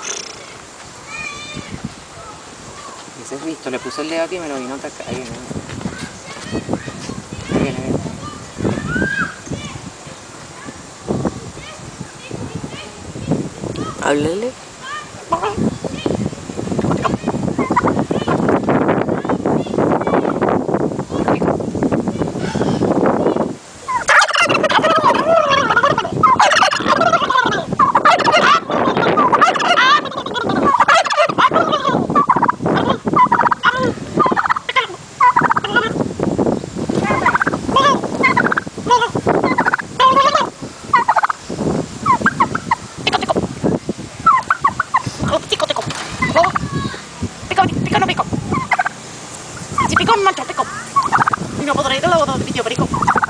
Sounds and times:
Gobble: 15.3s - 15.6s, 16.9s - 17.9s, 23.9s - 36.0s, 37.1s - 41.4s, 42.0s - 43.4s, 44.2s - 46.6s, 48.1s - 48.9s, 49.8s - 51.4s, 52.7s - 53.3s.

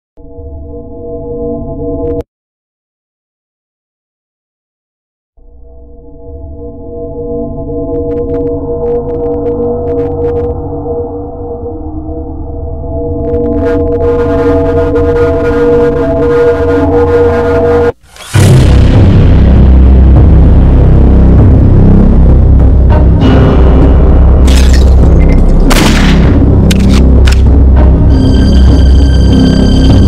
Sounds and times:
Music: 5.4s - 30.0s.

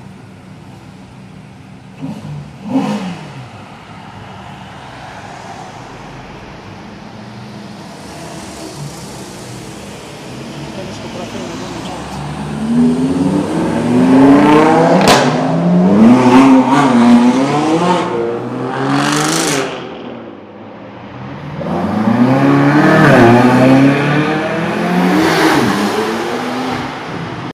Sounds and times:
Car: 0.0s - 27.5s
Accelerating, revving, vroom: 2.0s - 3.4s, 12.4s - 19.9s, 21.6s - 27.1s.

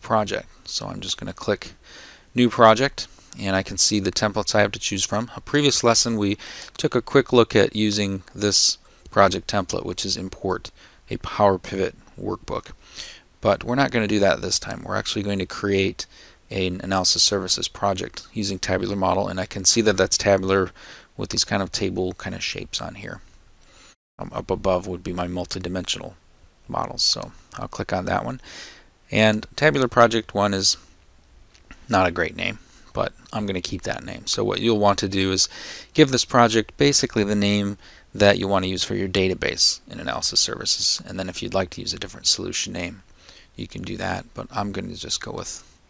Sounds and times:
Speech: 0.0s - 1.8s, 2.4s - 12.8s, 13.4s - 23.2s, 24.2s - 28.4s, 29.1s - 30.9s, 31.9s - 43.0s, 43.6s - 45.7s.

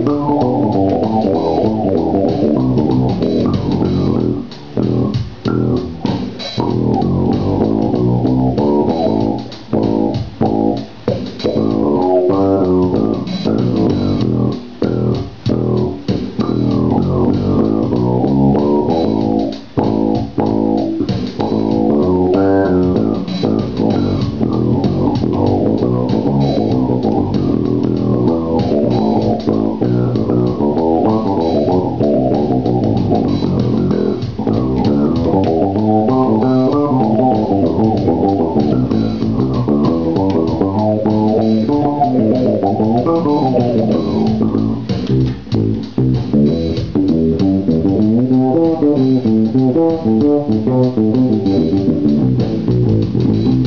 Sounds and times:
Bass guitar: 0.0s - 53.6s
Electric guitar: 0.0s - 53.6s.

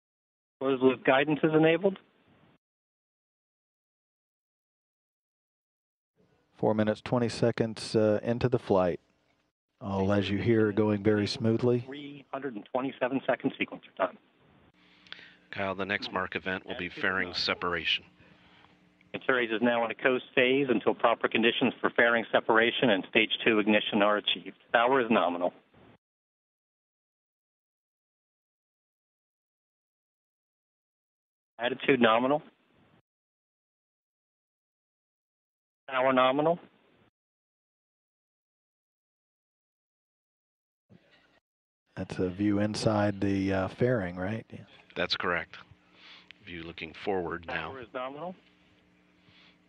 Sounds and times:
Speech: 0.6s - 2.0s, 6.6s - 9.0s, 9.8s - 14.2s, 15.5s - 18.1s, 19.2s - 25.6s, 31.6s - 32.5s, 35.9s - 36.6s, 42.0s - 45.7s, 46.4s - 48.4s.

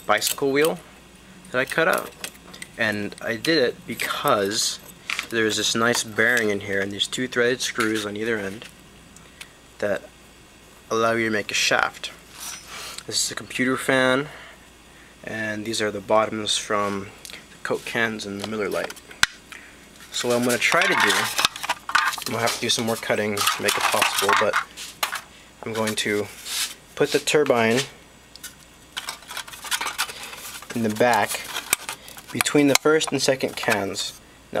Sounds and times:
Speech: 0.1s - 0.9s, 1.5s - 2.1s, 2.8s - 8.7s, 9.8s - 10.1s, 10.9s - 12.2s, 13.0s - 14.4s, 15.2s - 19.0s, 20.1s - 21.4s, 22.2s - 24.6s, 25.6s - 26.4s, 27.0s - 28.0s, 30.7s - 31.5s, 32.3s - 34.6s.

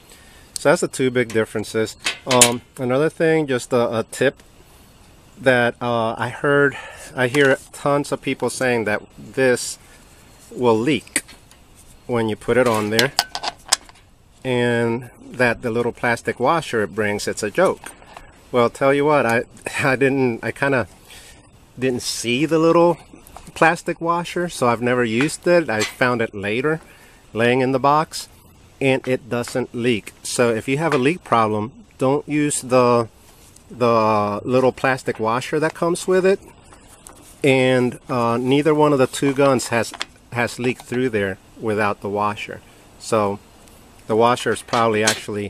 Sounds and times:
Speech: 0.6s - 4.4s, 5.4s - 9.8s, 10.5s - 11.2s, 12.1s - 13.2s, 14.4s - 17.9s, 18.5s - 20.9s, 21.8s - 33.1s, 33.7s - 36.5s, 37.4s - 43.4s, 44.1s - 45.5s.

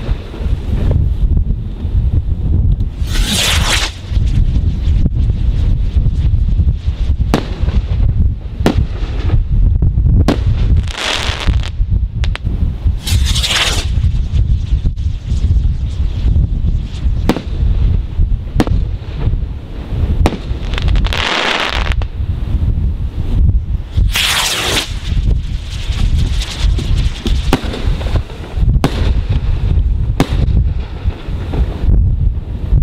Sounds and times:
Burst, pop: 8.6s - 8.9s, 10.2s - 13.9s, 17.2s - 17.6s, 18.6s - 18.8s, 20.2s - 22.0s, 24.1s - 25.0s, 26.5s - 27.9s, 28.8s - 29.2s, 30.2s - 31.2s.

